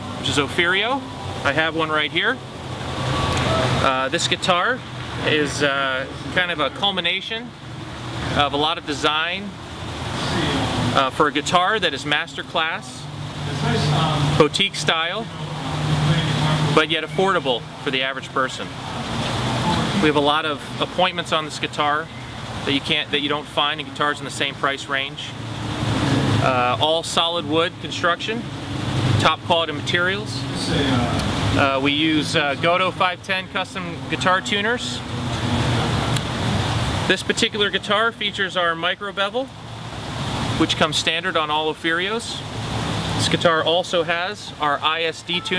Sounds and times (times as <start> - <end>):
Speech: 3.8 - 7.5, 8.4 - 9.5, 10.2 - 15.4, 16.1 - 18.7, 19.6 - 22.1, 22.7 - 25.4, 26.4 - 28.5, 29.2 - 35.0, 37.1 - 39.5, 40.6 - 42.5, 43.2 - 45.5.